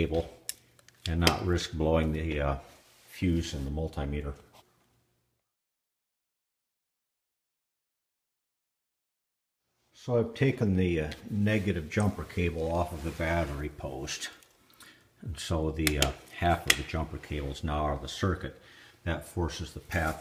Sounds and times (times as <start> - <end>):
Speech: 0.0 - 0.4, 1.1 - 4.5, 10.0 - 14.4, 15.2 - 20.2.